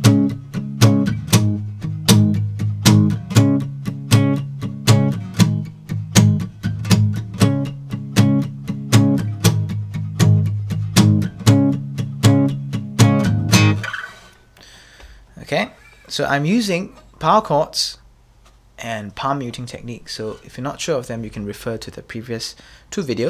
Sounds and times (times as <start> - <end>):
Strum: 0.0 - 14.5
Acoustic guitar: 0.0 - 15.2
Speech: 15.4 - 18.0, 18.8 - 23.3.